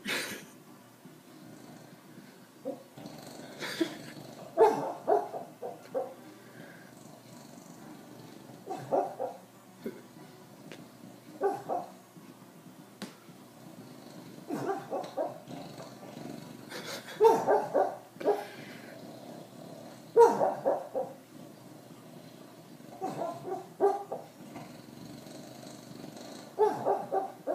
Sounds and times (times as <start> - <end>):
Bow-wow: 4.6 - 6.2, 8.7 - 9.4, 11.4 - 11.9, 14.5 - 15.4, 17.2 - 18.5, 20.2 - 21.2, 23.0 - 24.3, 26.6 - 27.5
Yip: 8.7 - 9.4, 11.4 - 11.9, 17.2 - 18.4, 23.0 - 24.2, 26.6 - 27.4.